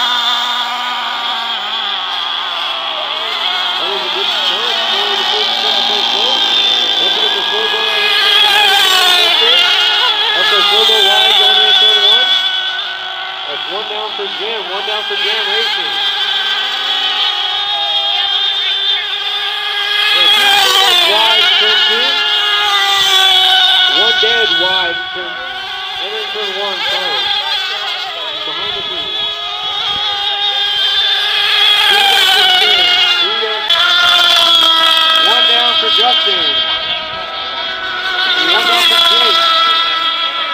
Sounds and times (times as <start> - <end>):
Speech: 3.8 - 12.2, 17.2 - 22.2, 23.8 - 36.9, 37.5 - 40.2.